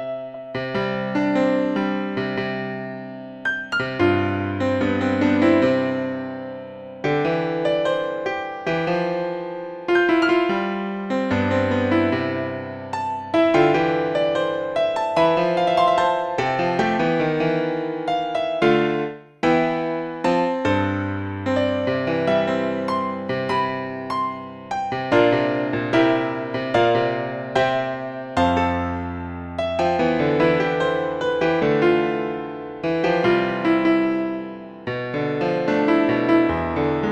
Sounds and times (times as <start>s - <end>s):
Piano: 0.0s - 37.1s.